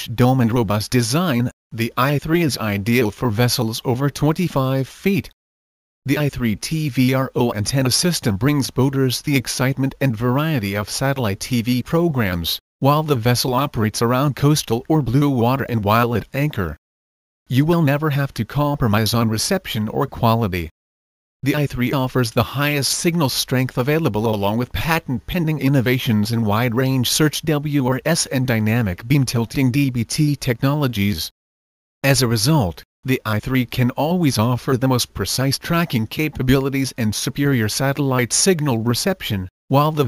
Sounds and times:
Speech: 0:00.0 - 0:05.4, 0:06.1 - 0:16.8, 0:17.5 - 0:20.8, 0:21.4 - 0:31.4, 0:32.0 - 0:40.0.

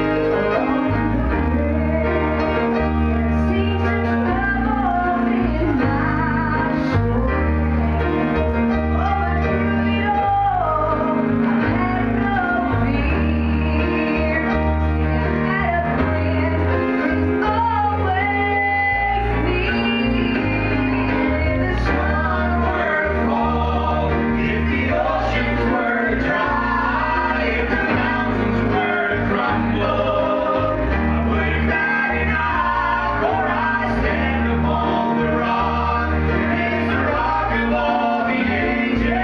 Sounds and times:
Music: 0:00.0 - 0:39.2
Female singing: 0:03.1 - 0:08.2, 0:09.0 - 0:14.7, 0:15.4 - 0:23.1.

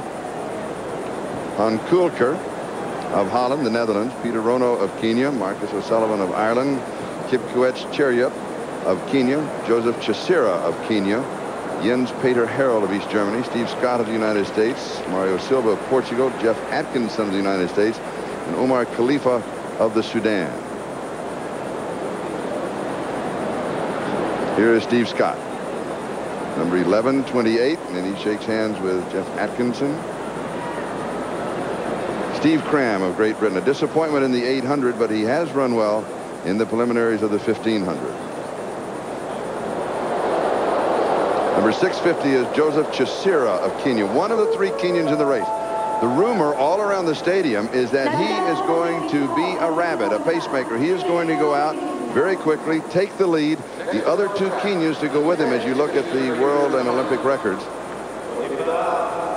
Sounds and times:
Outside, urban or manmade: 0:00.0 - 0:59.3
Speech: 0:01.6 - 0:02.4, 0:03.1 - 0:20.6, 0:24.6 - 0:25.4, 0:26.6 - 0:30.0, 0:32.3 - 0:38.2, 0:41.6 - 0:57.7.

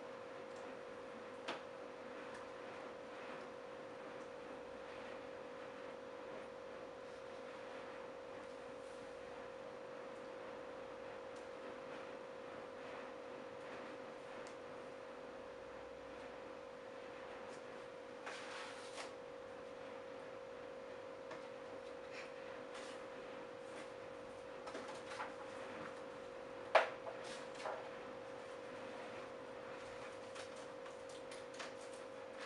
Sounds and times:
Inside, small room: 0:00.0 - 0:32.4.

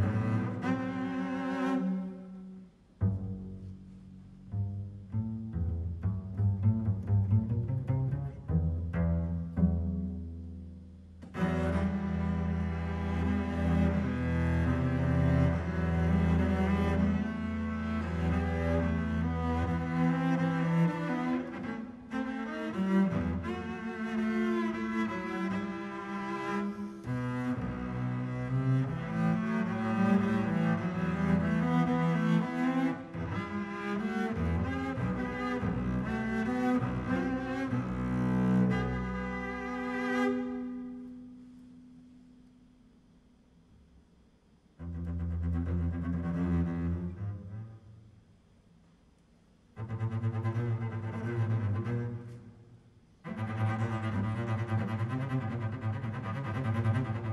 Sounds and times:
Cello: 0:00.0 - 0:57.3
Double bass: 0:00.0 - 0:57.3.

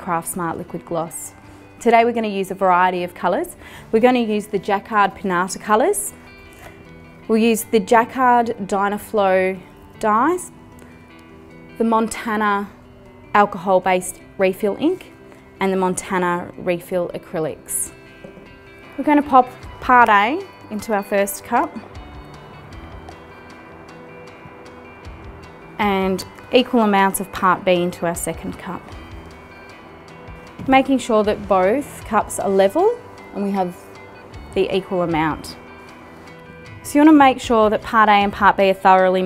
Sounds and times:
Music: 0:00.0 - 0:39.2
Speech: 0:30.7 - 0:33.8, 0:36.9 - 0:39.2.

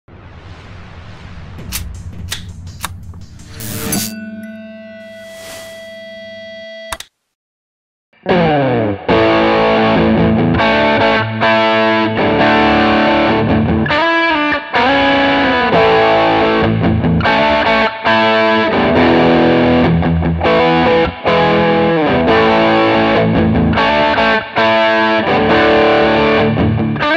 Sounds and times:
Guitar: 0:08.2 - 0:27.1.

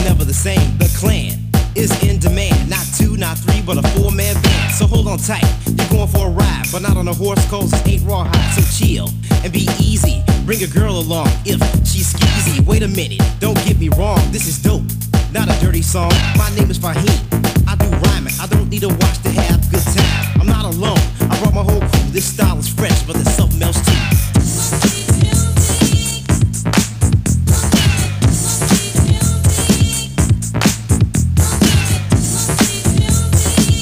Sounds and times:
Disco: 0:00.0 - 0:33.8.

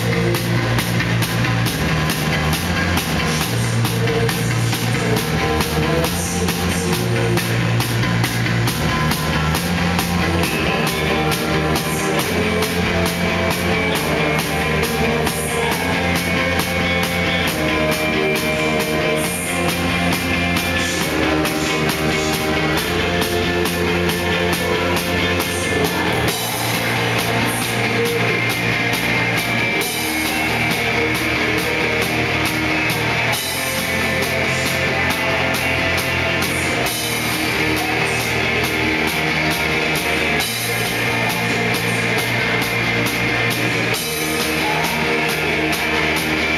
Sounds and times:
Music: 0:00.0 - 0:46.5.

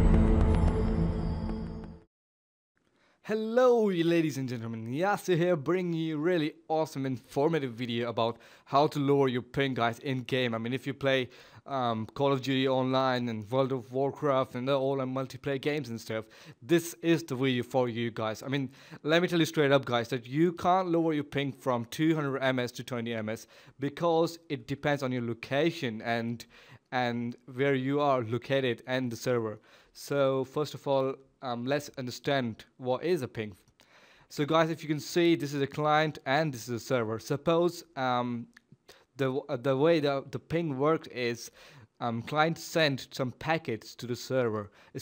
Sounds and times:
Speech: 0:03.3 - 0:33.6, 0:34.3 - 0:38.6, 0:39.2 - 0:45.0.

